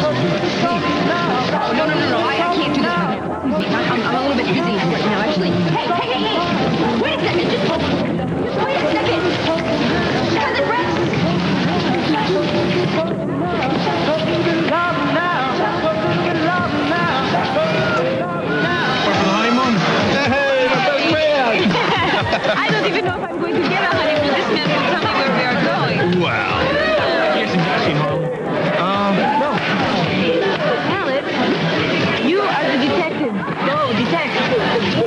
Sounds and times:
Music: 0.0s - 35.0s
Speech: 0.0s - 35.0s.

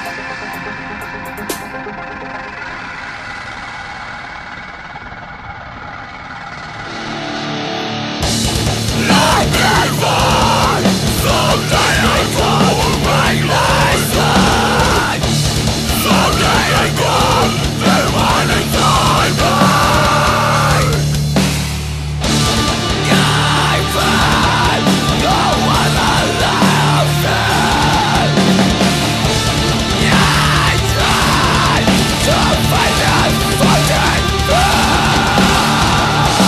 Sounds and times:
Music: 0.0s - 4.0s, 6.9s - 36.4s.

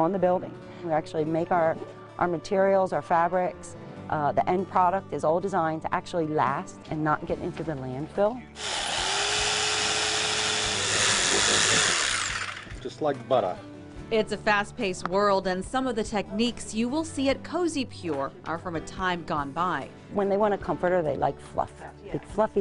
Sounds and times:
Sawing: 8.6s - 12.8s.

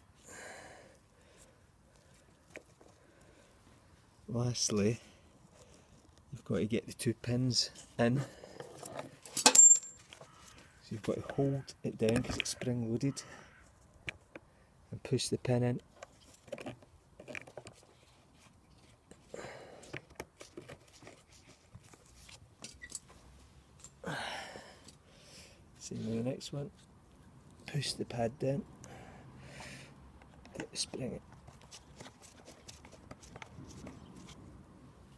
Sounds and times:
Speech: 4.3s - 5.0s, 6.4s - 8.3s, 10.8s - 13.2s, 14.9s - 15.8s, 25.8s - 26.7s, 27.7s - 28.7s, 30.6s - 31.2s.

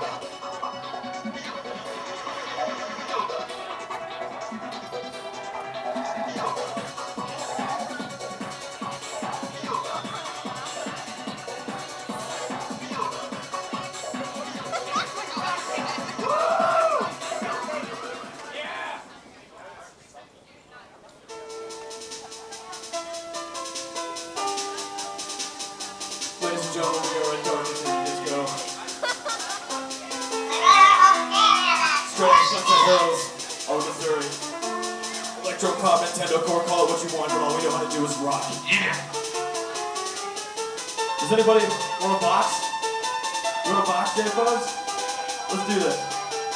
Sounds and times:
Electronic music: 0.0s - 18.7s, 21.3s - 46.5s
Speech: 26.4s - 28.8s, 30.5s - 34.4s, 35.4s - 39.1s, 41.2s - 42.6s, 43.7s - 44.7s, 45.5s - 46.1s.

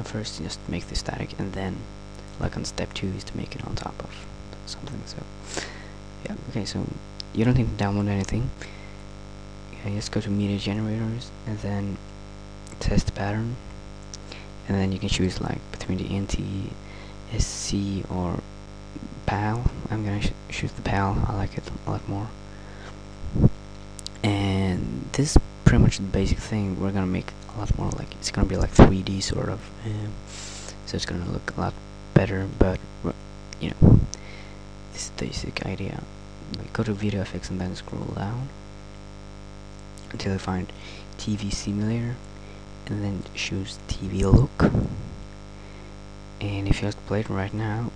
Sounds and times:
Speech: 0.0s - 8.8s, 9.7s - 12.0s, 12.7s - 22.4s, 23.3s - 38.6s, 40.0s - 45.2s, 46.4s - 47.9s
Static: 0.0s - 47.9s.

